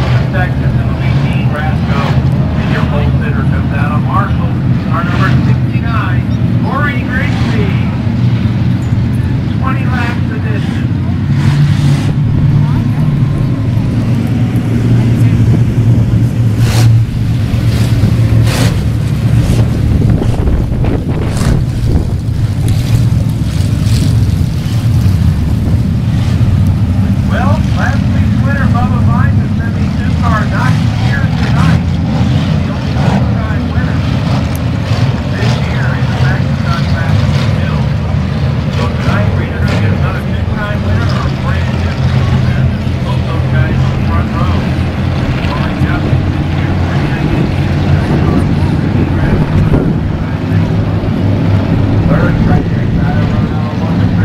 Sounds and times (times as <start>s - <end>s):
Speech: 0.0s - 8.0s, 9.5s - 11.0s, 27.3s - 34.2s, 35.2s - 38.0s, 38.8s - 50.8s, 52.0s - 54.2s
Car passing by: 11.2s - 20.6s.